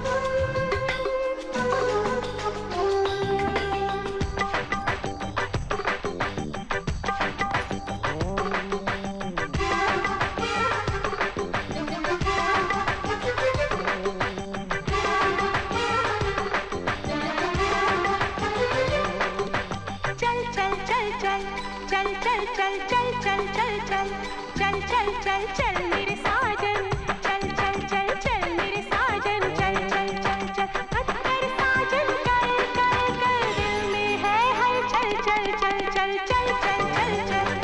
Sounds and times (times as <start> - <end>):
Music of Bollywood: 0.0 - 37.6.